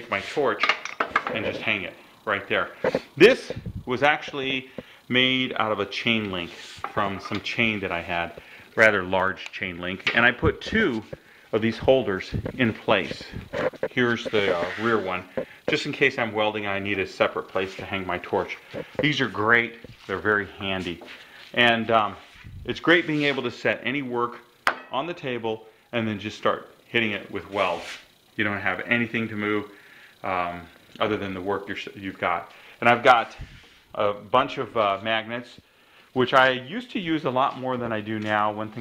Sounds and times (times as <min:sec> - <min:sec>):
Speech: 0:00.0 - 0:35.6, 0:36.2 - 0:38.8
Inside, small room: 0:00.0 - 0:38.8.